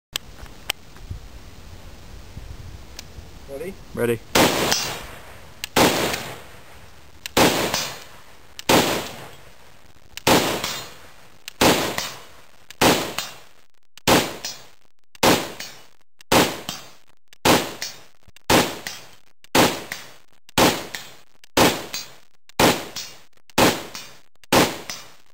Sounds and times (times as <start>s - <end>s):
Gunshot, gunfire: 4.4s - 5.1s, 5.8s - 6.4s, 7.4s - 8.0s, 8.7s - 9.3s, 10.3s - 11.0s, 11.6s - 12.2s, 12.8s - 13.4s, 14.1s - 14.6s, 15.2s - 25.2s.